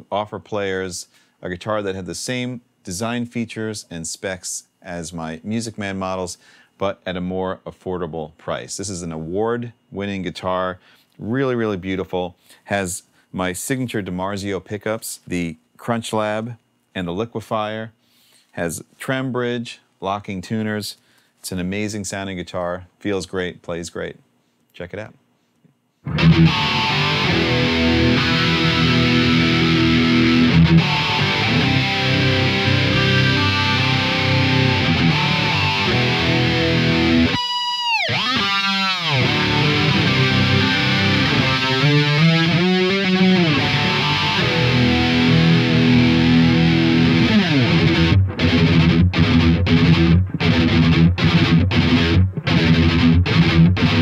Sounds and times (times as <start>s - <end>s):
Speech: 0.0s - 25.2s.